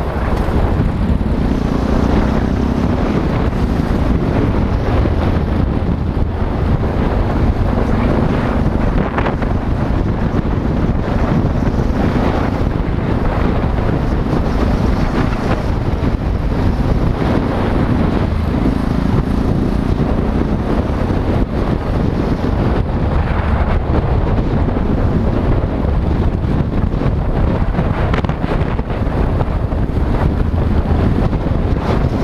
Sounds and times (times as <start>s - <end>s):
Car: 0.0s - 32.2s
Motorcycle: 0.0s - 32.2s
Traffic noise, roadway noise: 0.0s - 32.2s.